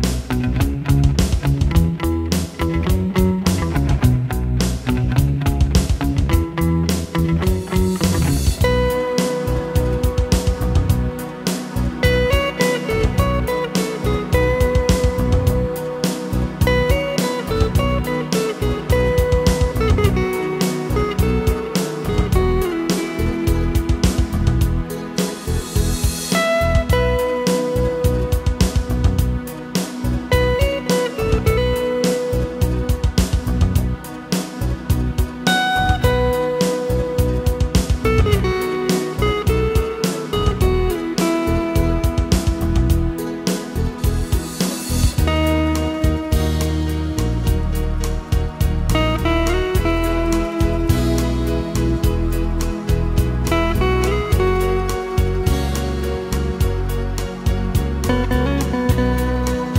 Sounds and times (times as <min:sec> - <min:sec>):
Plucked string instrument: 0:00.0 - 0:59.7.